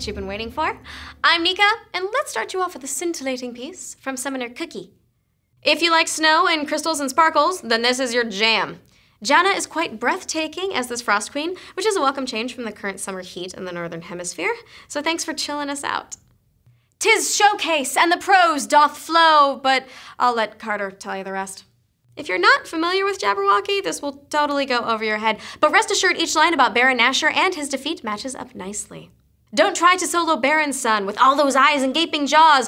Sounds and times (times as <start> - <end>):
Speech: 0.0 - 5.0, 5.6 - 16.2, 17.0 - 32.6.